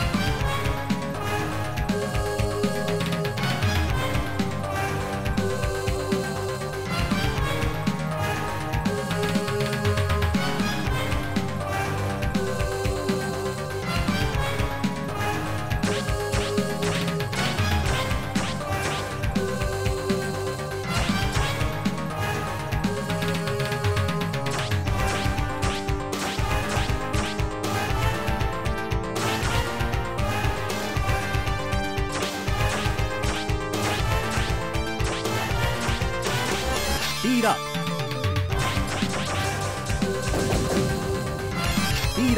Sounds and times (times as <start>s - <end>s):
Music: 0.0s - 42.3s.